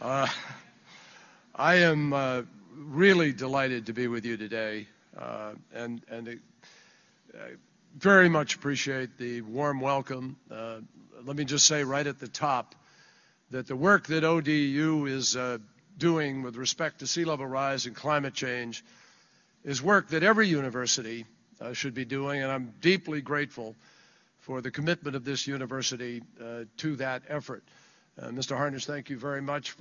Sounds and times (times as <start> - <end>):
Male speech, man speaking: 0.0 - 0.4, 1.6 - 6.4, 7.3 - 12.7, 13.5 - 18.8, 19.7 - 23.8, 24.4 - 27.6, 28.2 - 29.8
Narration, monologue: 0.0 - 29.8.